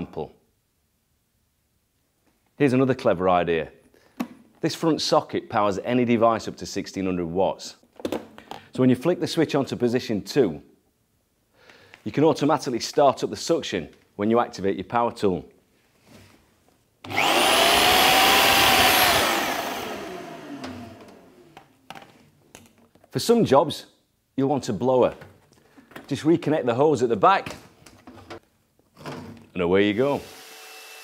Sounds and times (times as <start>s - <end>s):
Power tool: 17.1s - 21.6s, 30.1s - 31.0s.